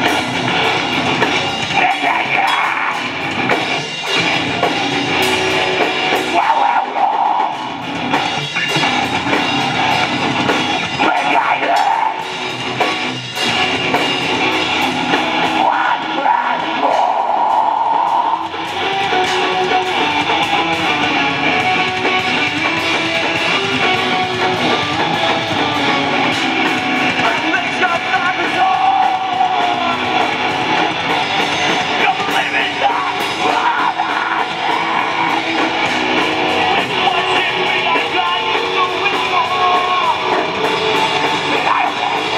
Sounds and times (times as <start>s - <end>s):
Guitar: 0.0s - 42.3s.